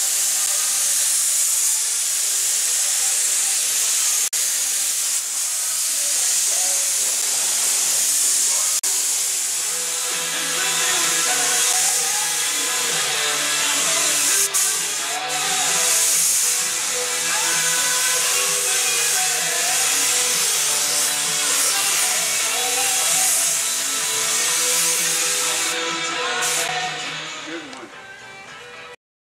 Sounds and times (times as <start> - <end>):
Music: 7.2 - 29.0
Speech: 26.2 - 28.0.